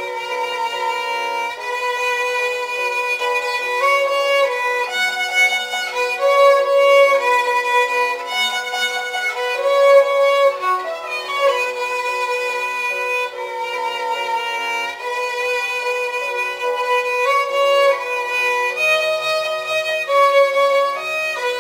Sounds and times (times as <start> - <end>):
Violin, fiddle: 0.0 - 21.6.